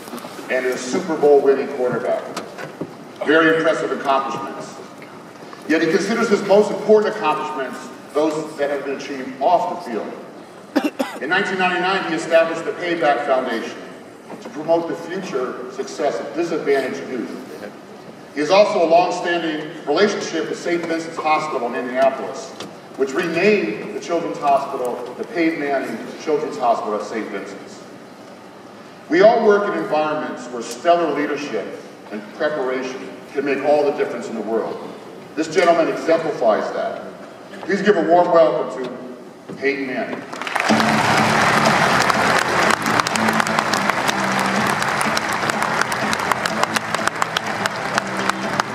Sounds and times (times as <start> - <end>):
Male speech, man speaking: 0.5 - 2.4, 3.2 - 4.8, 5.7 - 10.2, 11.2 - 13.9, 14.5 - 17.8, 18.4 - 27.8, 29.1 - 40.2.